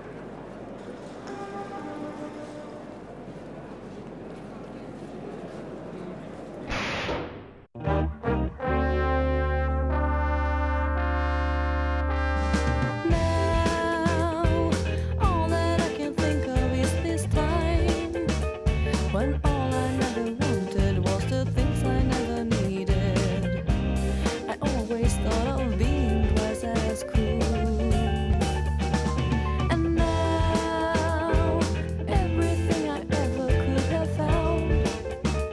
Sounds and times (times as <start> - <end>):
Trumpet: 1.2 - 3.1, 7.8 - 14.7
Trombone: 7.8 - 14.2.